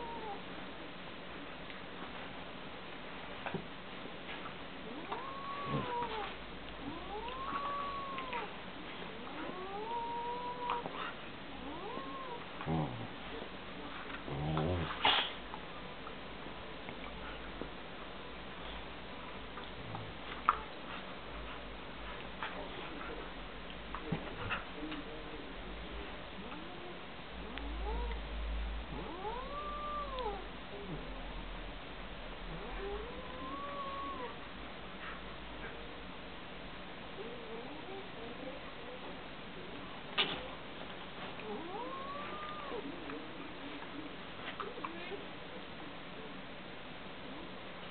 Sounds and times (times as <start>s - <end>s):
Domestic animals, pets: 0.0s - 0.5s, 4.4s - 13.2s, 14.0s - 15.4s, 26.5s - 28.2s, 28.9s - 31.1s, 32.4s - 35.8s, 37.2s - 38.6s, 41.3s - 43.4s, 44.5s - 45.2s.